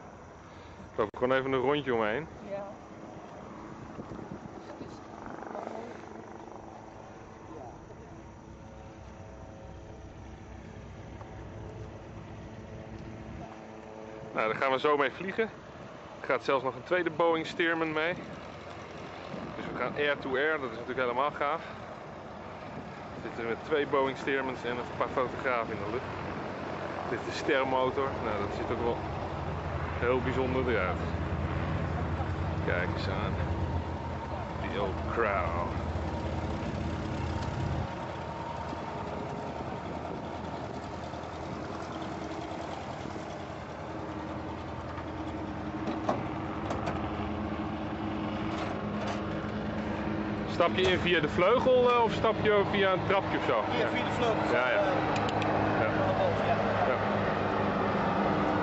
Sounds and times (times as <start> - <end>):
Speech: 1.0 - 2.7, 14.3 - 15.5, 16.2 - 18.2, 19.6 - 21.7, 23.2 - 26.1, 27.1 - 29.0, 30.0 - 31.1, 32.6 - 33.5, 34.5 - 35.8, 50.5 - 55.0, 55.8 - 57.0.